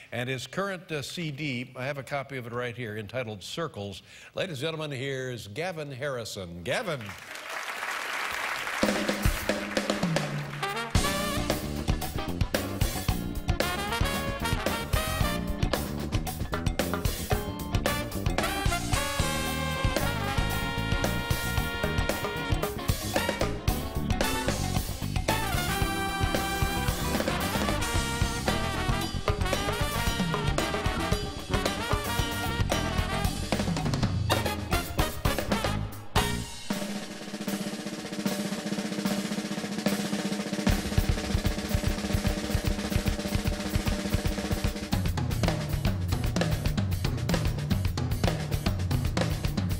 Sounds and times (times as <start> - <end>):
Drum kit: 8.3 - 49.7
Drum: 8.6 - 49.7.